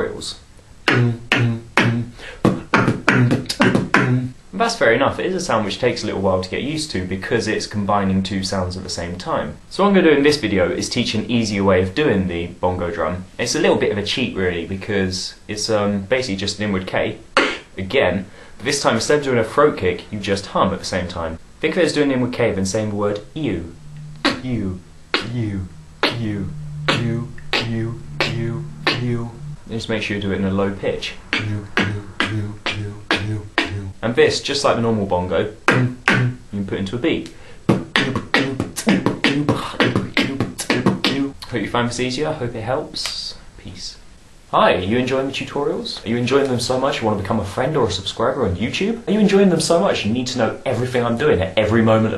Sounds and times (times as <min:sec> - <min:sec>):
Speech: 0:00.0 - 0:52.1
Beatboxing: 0:00.8 - 0:04.4, 0:17.4 - 0:17.8, 0:22.7 - 0:34.1, 0:35.5 - 0:36.5, 0:37.2 - 0:41.6.